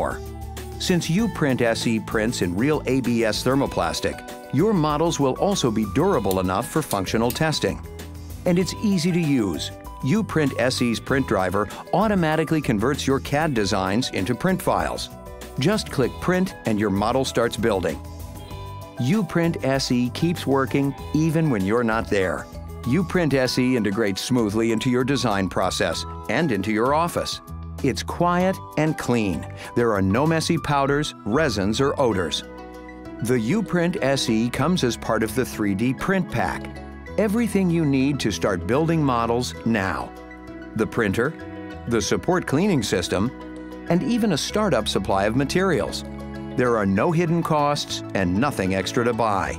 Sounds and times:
Speech: 0.0 - 0.2, 0.8 - 7.8, 8.5 - 18.0, 19.0 - 32.4, 33.2 - 40.1, 40.8 - 43.3, 43.9 - 46.0, 46.6 - 49.5
Music: 0.0 - 49.5.

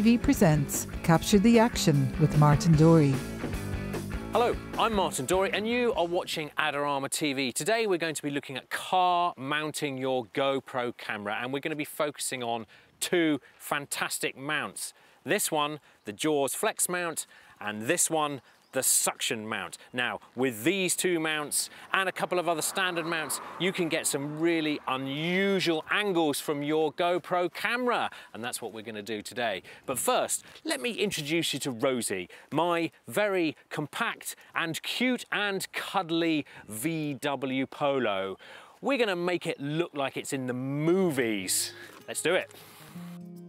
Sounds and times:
Speech: 0.0 - 3.2, 4.4 - 42.5.

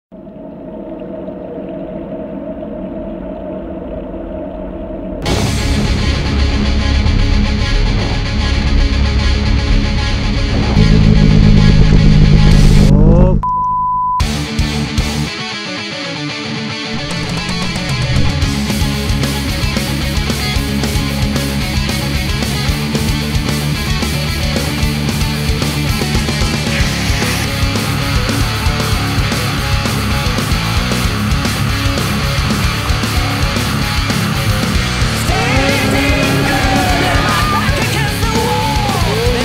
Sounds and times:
Music: 5.2 - 12.9, 14.2 - 39.4.

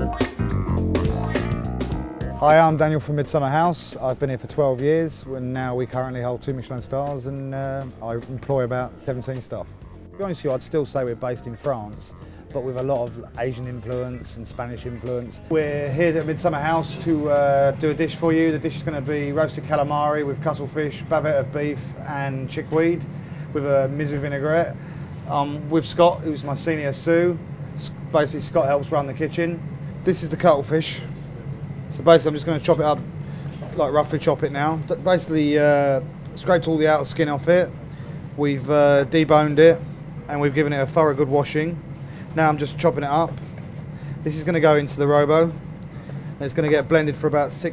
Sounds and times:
Music: 0.0 - 36.6
Speech: 2.4 - 31.2, 31.9 - 37.8, 38.4 - 43.4, 44.2 - 45.6, 46.4 - 47.7.

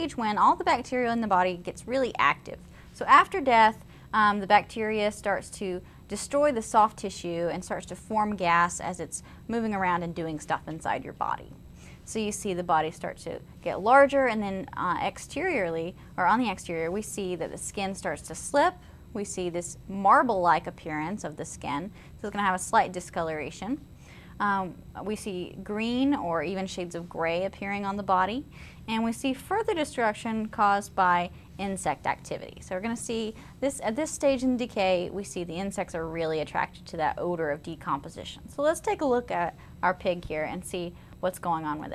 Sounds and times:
Speech: 0.0 - 23.8, 24.4 - 41.9.

